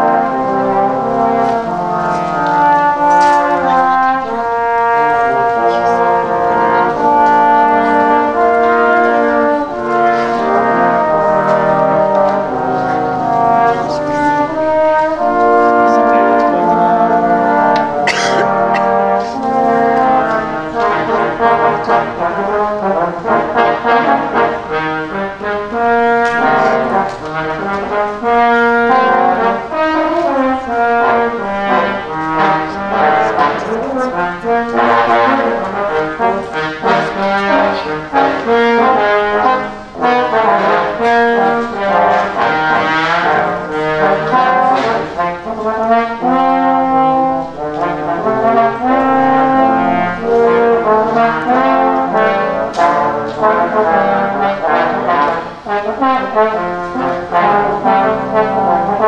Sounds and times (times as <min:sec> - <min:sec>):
Inside, large room or hall: 0:00.0 - 0:59.0
Orchestra: 0:00.0 - 0:59.0
Trombone: 0:00.0 - 0:59.0.